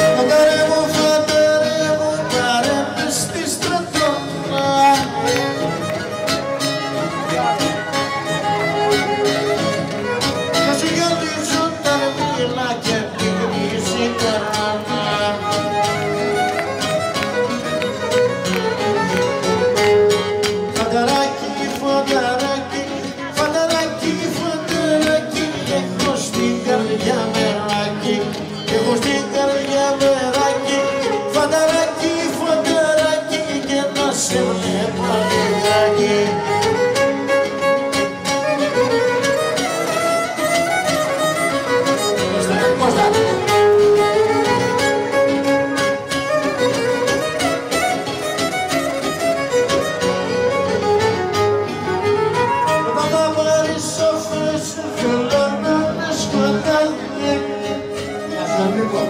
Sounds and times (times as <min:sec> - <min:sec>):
String section: 0:00.0 - 0:59.0.